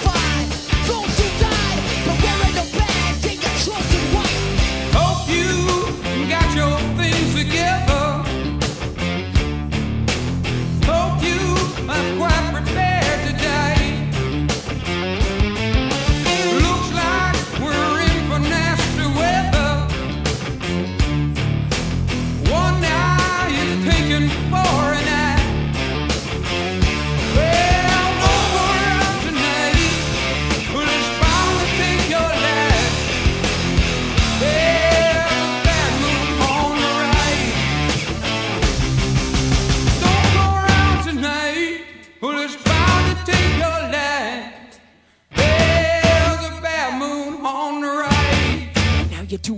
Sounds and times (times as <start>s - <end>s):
Music: 0.0s - 49.5s
Singing: 27.4s - 30.1s, 34.4s - 37.5s, 45.4s - 48.7s.